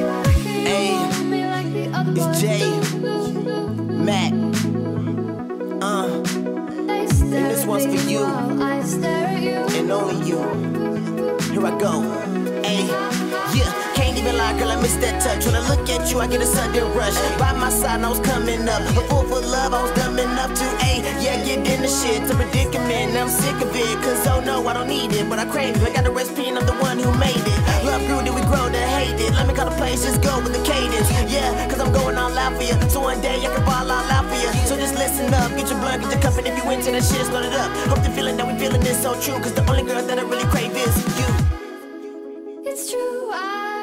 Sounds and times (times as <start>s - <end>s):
Dubstep: 0.0s - 41.7s.